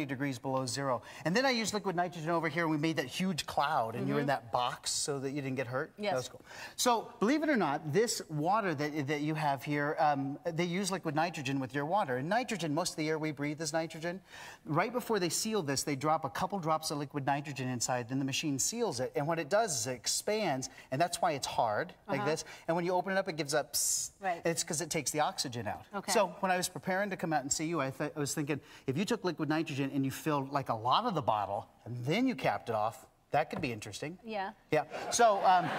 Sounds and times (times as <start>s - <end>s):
Speech: 22.1s - 23.5s.